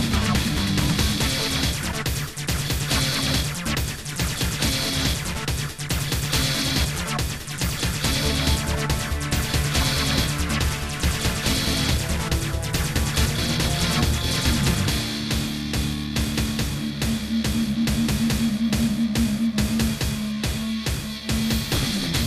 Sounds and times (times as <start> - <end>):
Background music: 0.0 - 22.2.